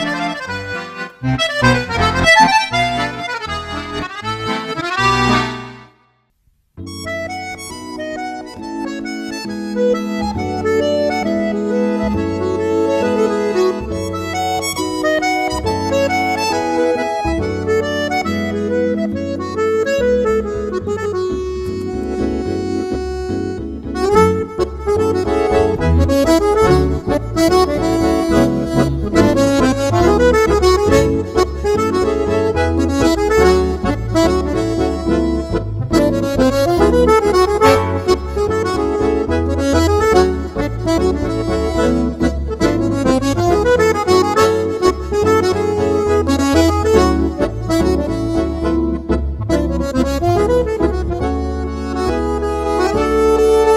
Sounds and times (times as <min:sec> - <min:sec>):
Music: 0:00.0 - 0:53.7.